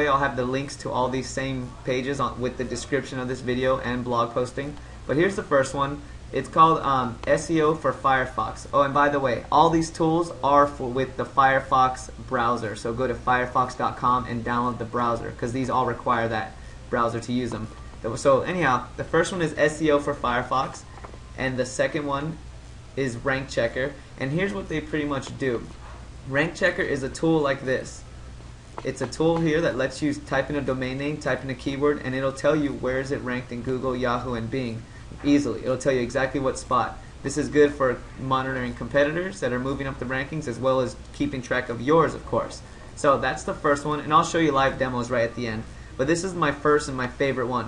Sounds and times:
Speech: 0.0s - 28.1s, 28.8s - 47.6s.

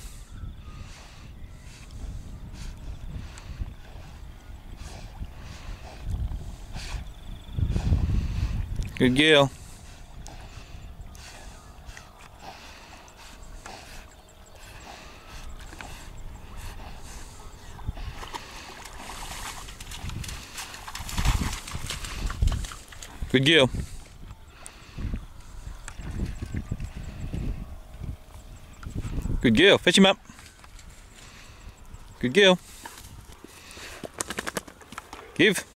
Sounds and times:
Speech: 9.0s - 9.6s, 23.3s - 23.8s, 29.4s - 30.2s, 32.2s - 32.6s, 35.4s - 35.7s.

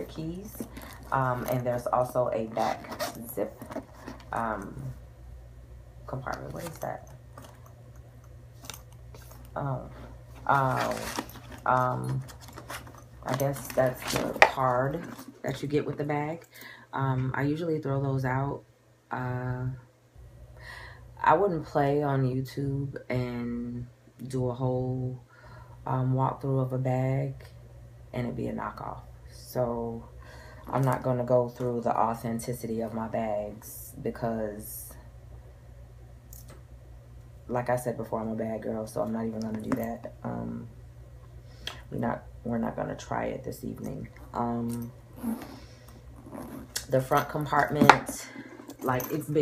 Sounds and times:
Speech: 0.0s - 3.6s, 4.3s - 5.0s, 6.1s - 7.0s, 9.6s - 12.3s, 13.2s - 19.8s, 21.2s - 25.2s, 25.8s - 27.5s, 28.2s - 30.1s, 30.7s - 35.0s, 37.5s - 40.7s, 41.9s - 45.5s, 46.8s - 49.4s
Inside, small room: 0.0s - 49.4s.

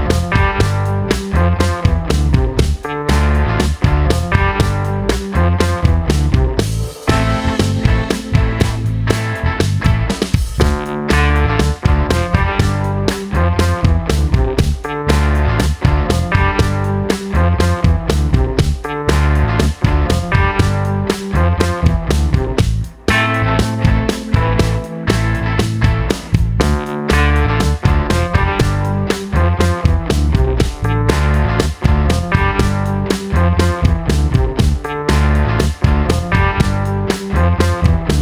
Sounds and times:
Music: 0.0s - 38.2s.

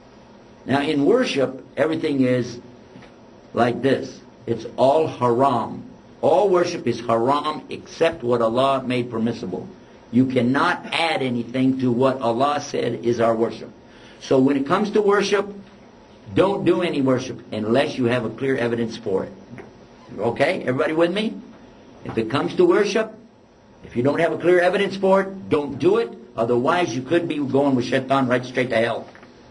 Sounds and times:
Speech: 0.7s - 2.7s, 3.5s - 15.6s, 16.3s - 29.2s.

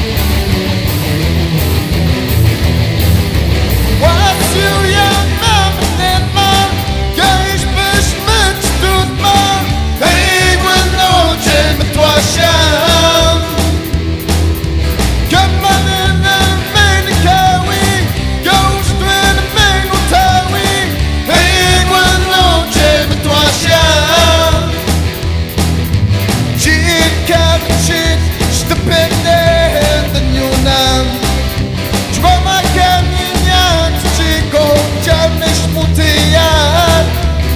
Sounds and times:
Progressive rock: 0.0s - 37.5s
Rock and roll: 0.0s - 37.5s.

